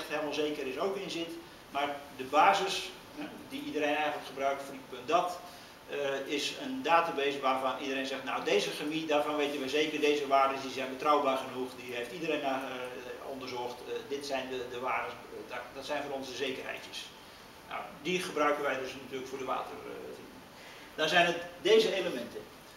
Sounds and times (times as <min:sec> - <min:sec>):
Speech: 0:00.0 - 0:20.3, 0:21.0 - 0:22.5.